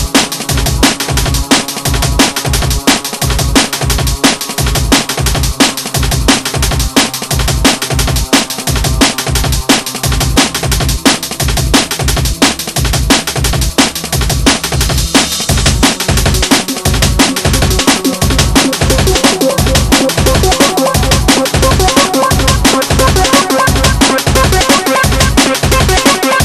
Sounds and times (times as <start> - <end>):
Music: 0.0 - 26.4.